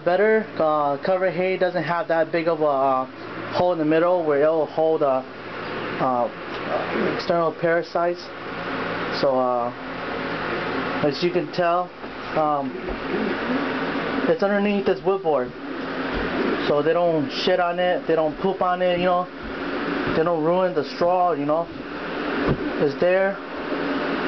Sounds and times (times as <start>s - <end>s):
Speech: 0.0s - 5.3s, 6.0s - 8.3s, 9.2s - 9.8s, 11.0s - 13.3s, 14.3s - 15.6s, 16.6s - 19.3s, 20.2s - 21.7s, 22.8s - 23.4s.